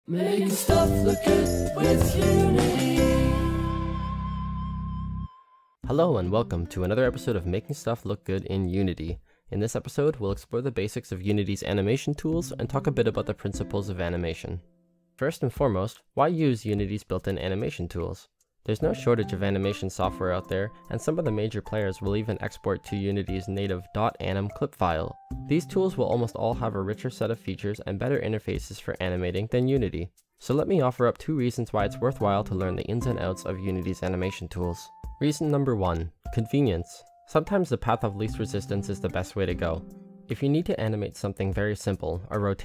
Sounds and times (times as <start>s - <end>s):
Music: 0.1s - 9.2s, 11.4s - 14.7s, 18.8s - 42.6s
Speech: 5.8s - 14.6s, 15.2s - 42.6s.